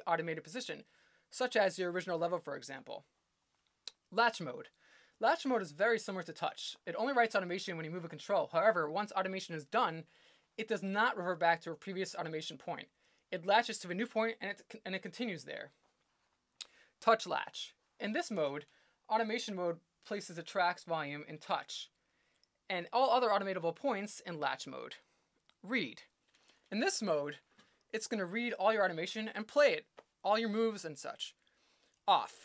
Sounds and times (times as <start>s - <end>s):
Speech: 0.0s - 3.1s, 3.9s - 15.8s, 17.0s - 21.9s, 22.7s - 25.0s, 25.6s - 26.1s, 26.7s - 27.4s, 28.0s - 31.4s, 32.1s - 32.4s.